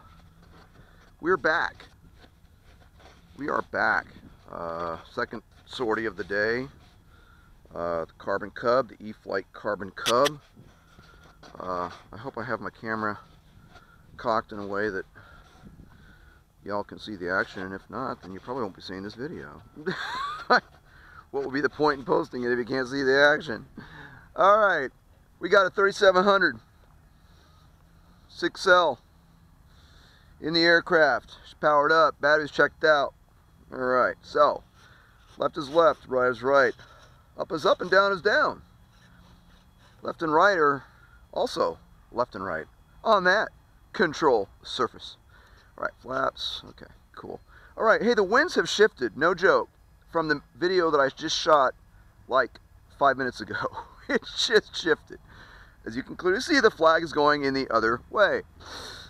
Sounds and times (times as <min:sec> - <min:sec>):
Speech: 0:01.2 - 0:01.9, 0:03.4 - 0:06.8, 0:07.7 - 0:10.4, 0:11.5 - 0:13.3, 0:14.2 - 0:15.1, 0:16.6 - 0:19.9, 0:21.3 - 0:23.7, 0:24.3 - 0:26.6, 0:28.3 - 0:29.0, 0:30.4 - 0:33.1, 0:33.7 - 0:34.6, 0:35.4 - 0:36.8, 0:37.4 - 0:38.6, 0:40.0 - 0:45.2, 0:45.8 - 0:55.2, 0:55.8 - 0:58.5.